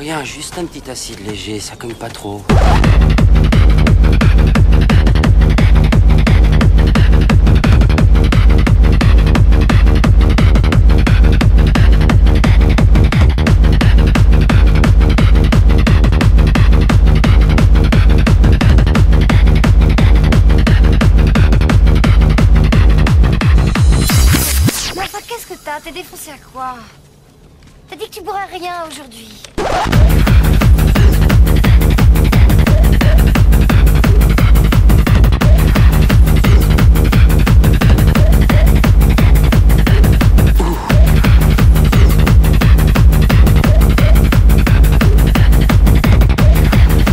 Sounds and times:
Speech: 0:00.0 - 0:02.5, 0:27.9 - 0:29.5
Music: 0:02.5 - 0:25.9, 0:29.6 - 0:47.1.

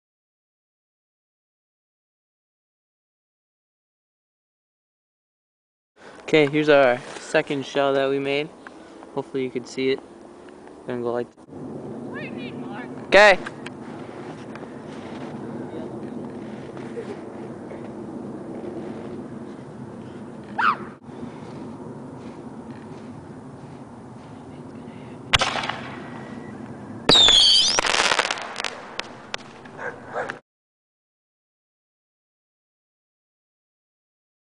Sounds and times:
Outside, urban or manmade: 0:06.0 - 0:30.4.

